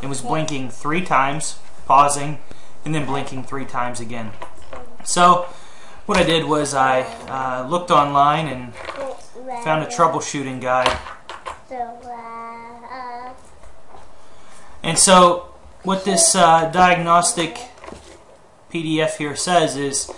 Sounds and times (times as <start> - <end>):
Speech: 0.0 - 4.4, 6.1 - 10.9, 14.8 - 17.8, 18.8 - 20.1.